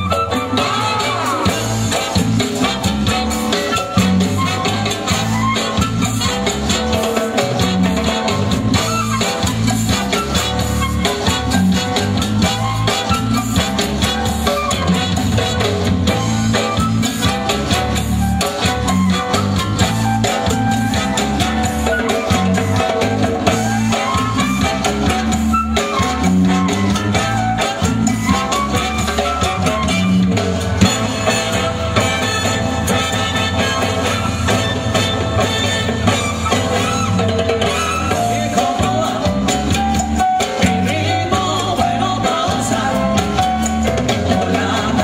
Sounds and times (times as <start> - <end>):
Musical instrument: 0.0 - 45.0.